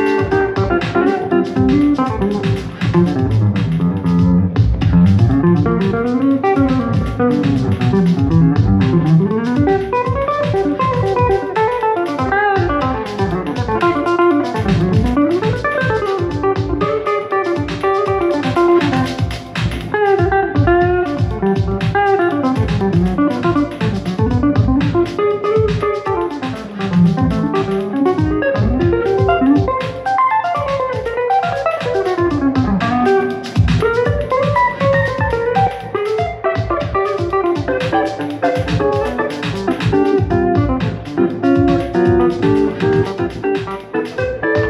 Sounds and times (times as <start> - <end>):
Acoustic guitar: 0.0 - 44.7
Drum: 0.0 - 44.7
Strum: 0.0 - 44.7.